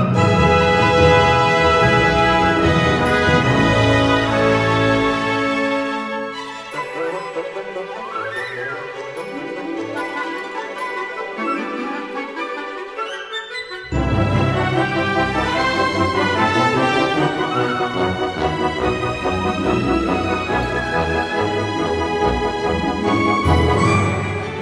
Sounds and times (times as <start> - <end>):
Violin, fiddle: 0.0 - 24.6.